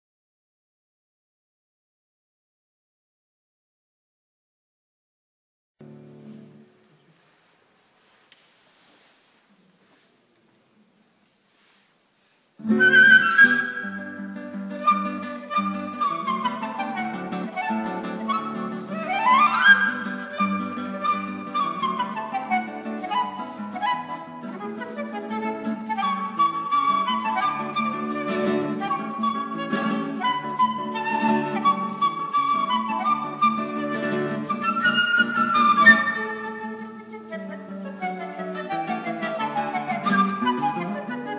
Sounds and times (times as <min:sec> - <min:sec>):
Acoustic guitar: 0:05.8 - 0:09.3, 0:12.6 - 0:41.3.